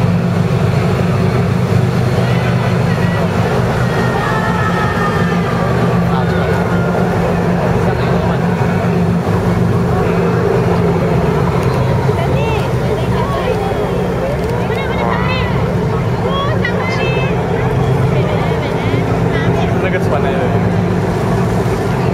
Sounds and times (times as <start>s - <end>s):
Motorboat, speedboat: 0.0s - 22.1s.